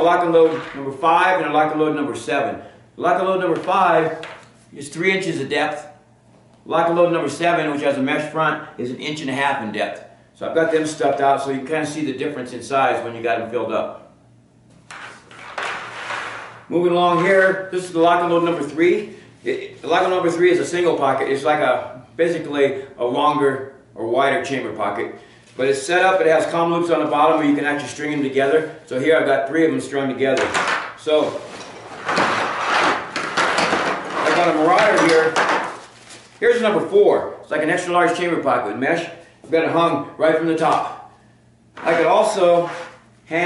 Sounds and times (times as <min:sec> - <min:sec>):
Speech: 0:00.0 - 0:06.0, 0:06.7 - 0:14.1, 0:16.7 - 0:31.5, 0:34.2 - 0:35.5, 0:36.4 - 0:41.1, 0:41.8 - 0:43.4
Inside, small room: 0:00.0 - 0:43.4.